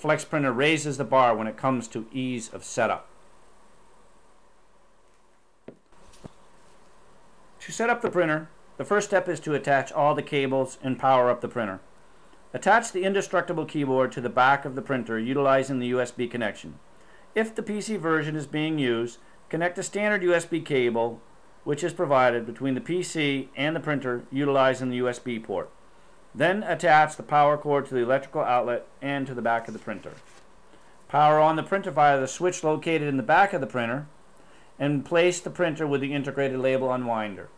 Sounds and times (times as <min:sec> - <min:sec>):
Speech: 0:00.0 - 0:03.1, 0:07.6 - 0:11.9, 0:12.5 - 0:16.8, 0:17.4 - 0:25.8, 0:26.4 - 0:30.3, 0:31.1 - 0:34.1, 0:34.8 - 0:37.5.